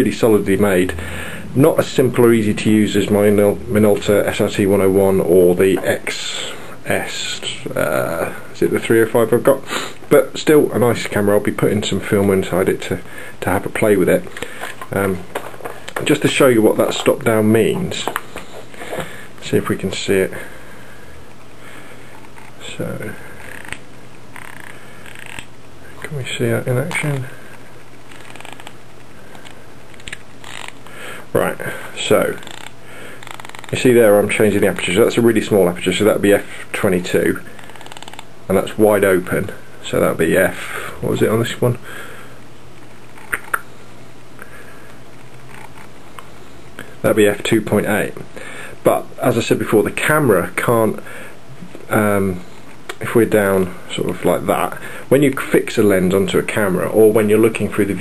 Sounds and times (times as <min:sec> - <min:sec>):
Speech: 0:00.0 - 0:14.3, 0:14.9 - 0:15.3, 0:16.0 - 0:18.2, 0:19.4 - 0:20.6, 0:22.6 - 0:23.4, 0:26.0 - 0:27.4, 0:31.3 - 0:32.5, 0:33.7 - 0:37.5, 0:38.5 - 0:41.8, 0:47.0 - 0:51.1, 0:51.9 - 0:58.0.